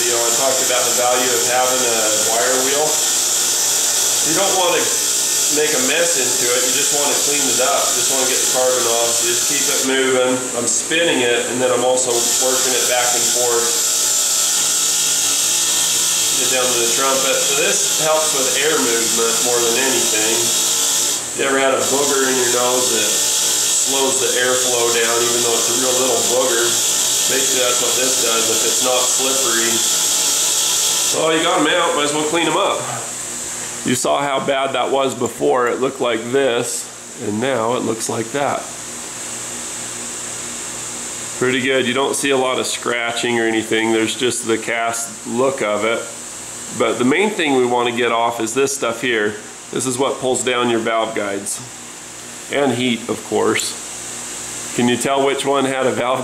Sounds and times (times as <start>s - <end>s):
Speech: 0.0s - 3.0s, 4.2s - 13.8s, 16.4s - 20.6s, 21.4s - 23.2s, 23.8s - 29.9s, 31.1s - 33.1s, 33.8s - 38.8s, 41.4s - 51.7s, 52.5s - 53.8s, 54.7s - 56.2s
Inside, small room: 0.0s - 56.2s.